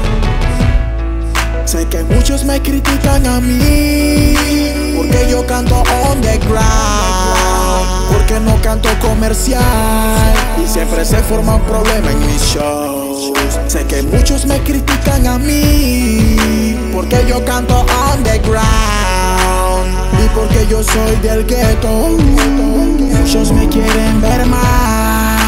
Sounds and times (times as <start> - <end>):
Music: 0.0 - 25.4.